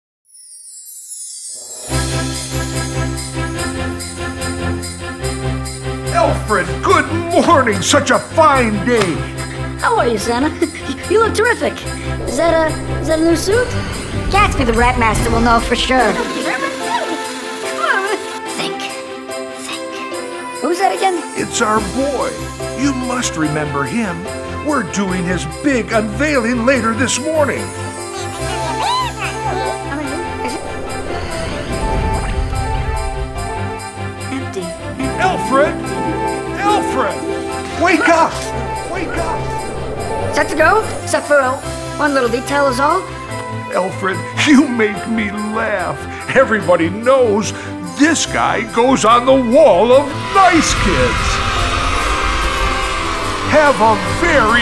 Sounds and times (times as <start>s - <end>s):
Jingle bell: 0.3s - 54.6s.